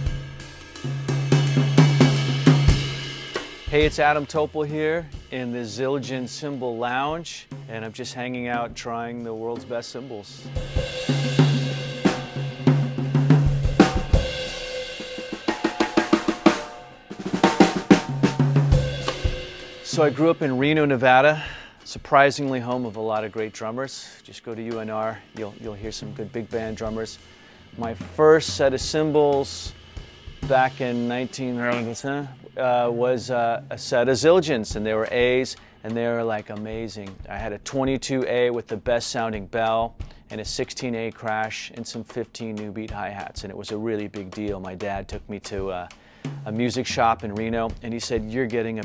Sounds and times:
Music: 0.0 - 48.8
Speech: 3.7 - 10.5, 19.8 - 27.2, 27.8 - 29.8, 30.4 - 48.8.

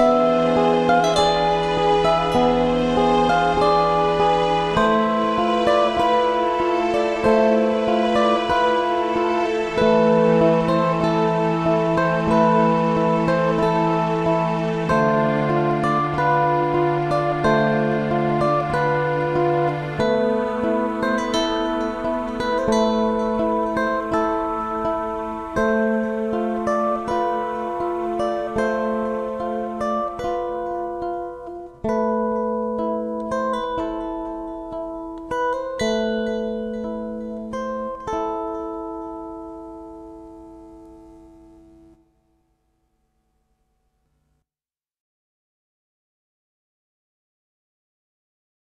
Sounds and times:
Guitar: 0.0 - 43.1.

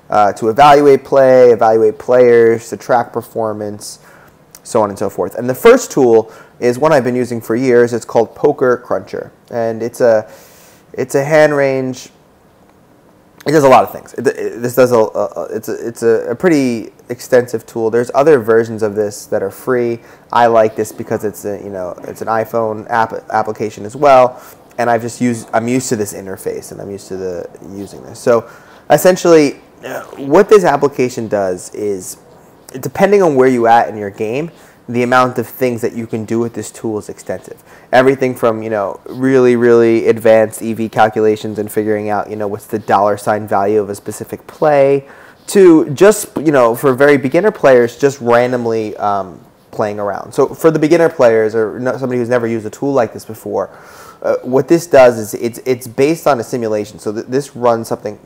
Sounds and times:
Speech: 0.1 - 4.0, 4.6 - 10.3, 10.9 - 12.2, 13.4 - 58.2.

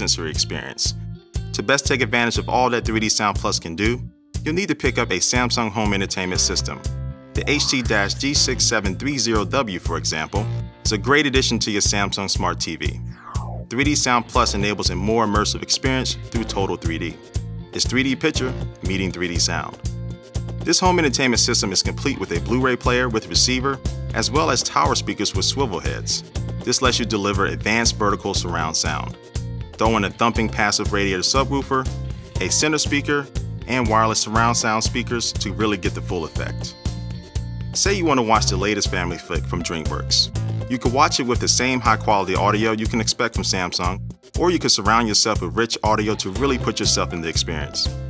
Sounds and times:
Speech: 0.0 - 17.2, 17.8 - 19.8, 20.6 - 29.2, 29.8 - 36.8, 37.8 - 47.9
Music: 0.0 - 48.0.

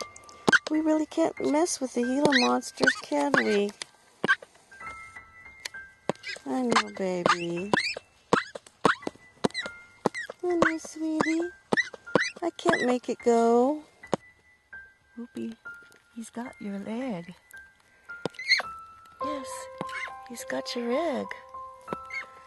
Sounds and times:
Music: 0.0 - 22.4
Speech: 0.7 - 3.7, 6.5 - 7.7, 10.4 - 11.5, 12.4 - 13.8.

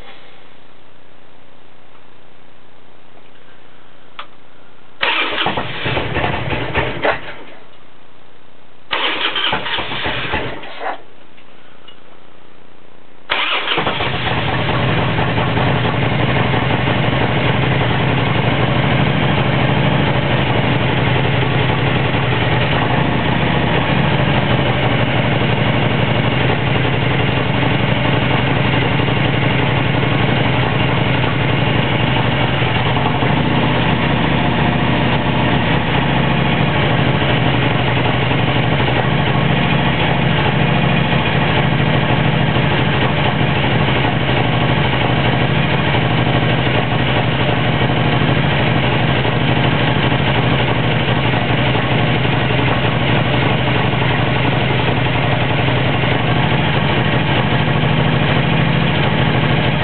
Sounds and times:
Vehicle: 5.0 - 7.7, 8.9 - 11.1, 13.3 - 59.8.

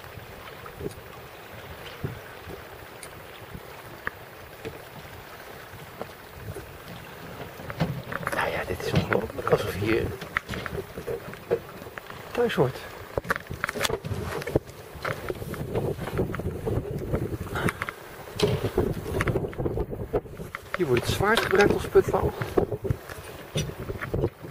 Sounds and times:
Boat, Water vehicle: 0.0 - 24.5
Speech: 8.3 - 10.2, 12.4 - 12.9, 20.8 - 22.4.

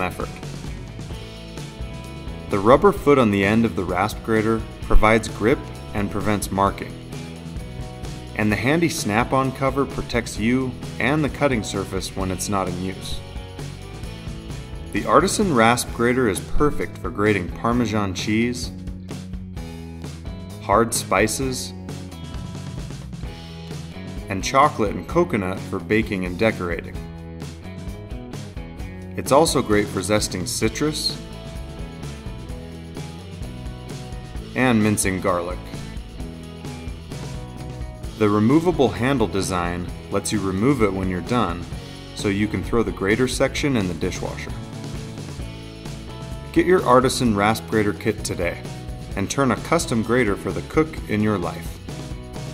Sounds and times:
Speech: 0.0 - 0.4, 2.5 - 7.0, 8.4 - 13.2, 14.9 - 18.8, 20.6 - 21.8, 24.3 - 27.0, 29.2 - 31.2, 34.5 - 35.8, 38.1 - 44.6, 46.5 - 48.6, 49.2 - 51.8
Music: 0.0 - 52.5.

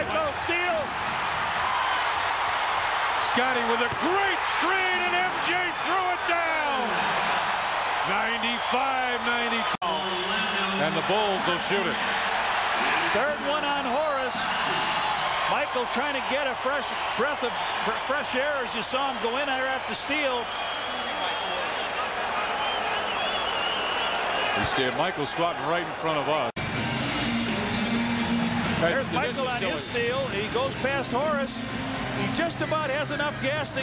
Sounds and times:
Speech: 3.2 - 7.0, 8.1 - 12.0, 13.1 - 14.5, 15.5 - 20.5, 24.6 - 26.5, 28.8 - 31.6, 32.3 - 33.8
Music: 26.6 - 33.8.

